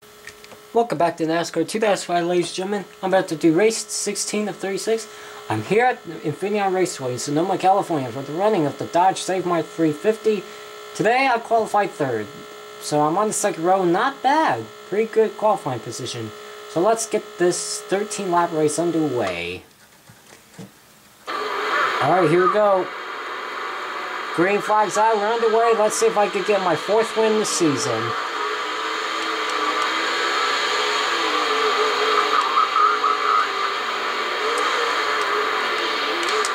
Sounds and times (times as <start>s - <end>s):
Speech: 0.8s - 19.7s, 22.0s - 22.9s, 24.4s - 28.2s.